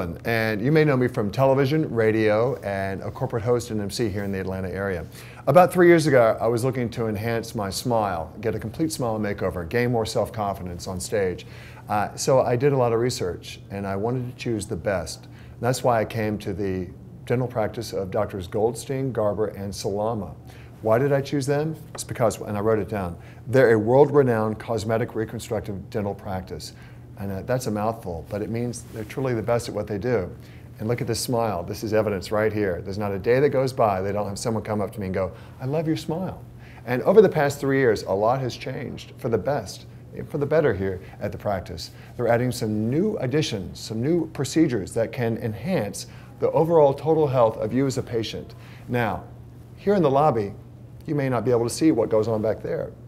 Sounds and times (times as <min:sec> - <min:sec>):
Speech: 0:00.0 - 0:53.0.